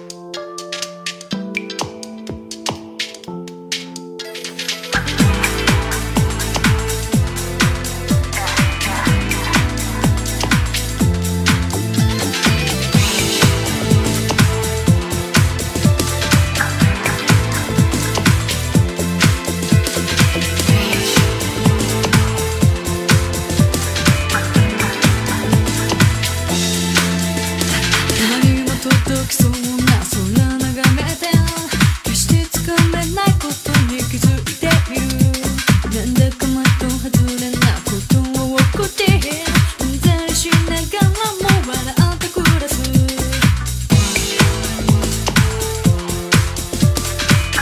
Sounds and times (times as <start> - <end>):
Music: 0.0 - 47.6.